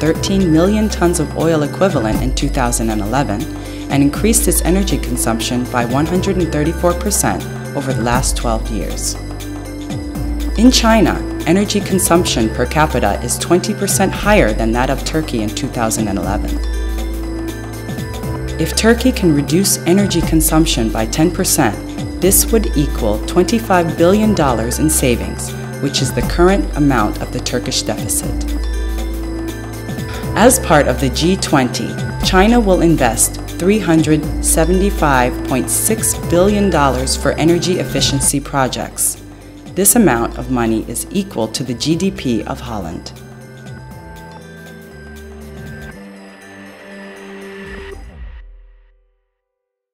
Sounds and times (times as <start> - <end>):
Speech: 0.0 - 9.2, 10.6 - 16.6, 18.6 - 28.4, 30.4 - 39.2, 39.8 - 43.2
Music: 0.0 - 49.8.